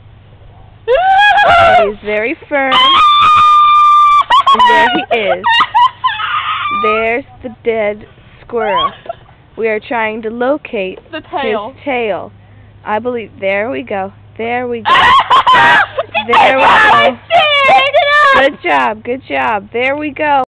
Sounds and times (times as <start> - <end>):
Speech: 16.2 - 20.4.